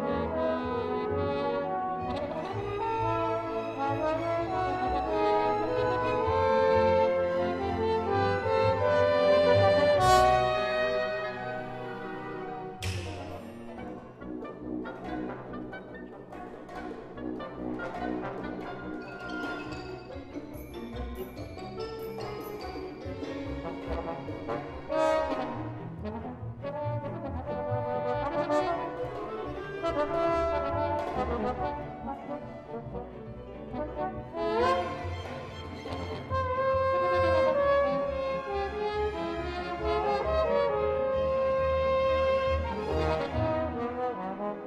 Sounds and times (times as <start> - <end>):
Trombone: 0.0 - 44.6
Trumpet: 0.0 - 44.6.